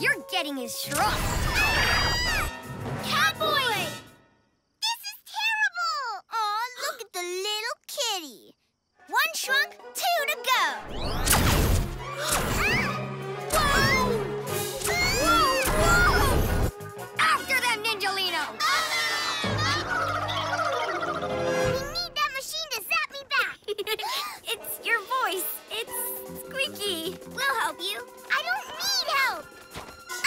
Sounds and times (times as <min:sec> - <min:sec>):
Music: 0:00.0 - 0:04.6, 0:09.0 - 0:22.4, 0:24.6 - 0:30.2.